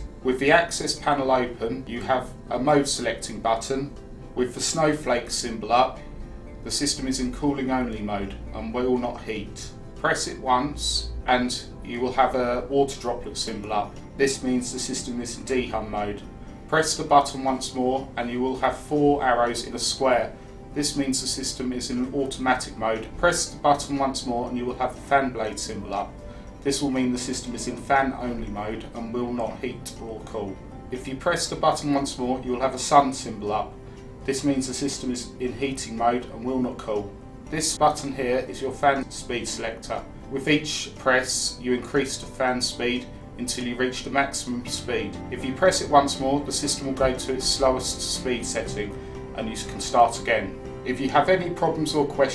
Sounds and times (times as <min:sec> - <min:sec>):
Speech: 0:00.0 - 0:06.0, 0:06.6 - 0:52.3
Music: 0:00.0 - 0:52.3.